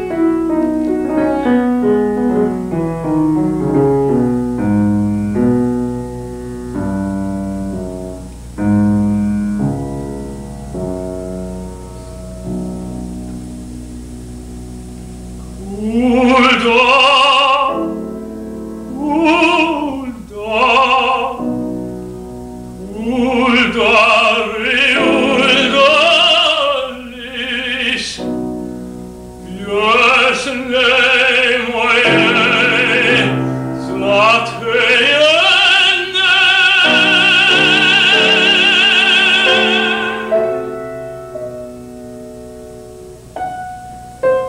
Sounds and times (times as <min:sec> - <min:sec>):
Music: 0:00.0 - 0:44.4
Male singing: 0:15.6 - 0:18.0, 0:18.9 - 0:21.6, 0:22.8 - 0:28.4, 0:29.4 - 0:40.8.